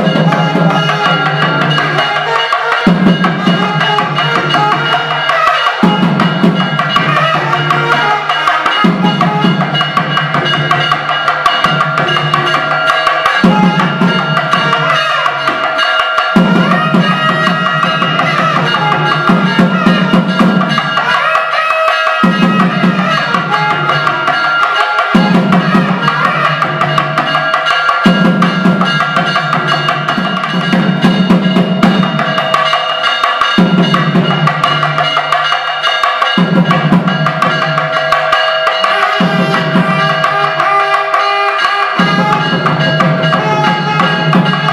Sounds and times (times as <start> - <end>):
Trumpet: 0.0 - 10.5, 13.4 - 27.4, 38.7 - 44.7
Traditional music: 0.0 - 44.7.